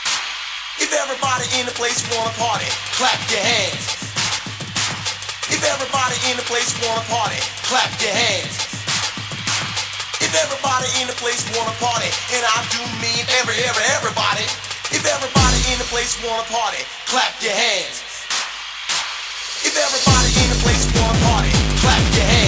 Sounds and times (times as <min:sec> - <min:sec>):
Music: 0:00.0 - 0:22.4.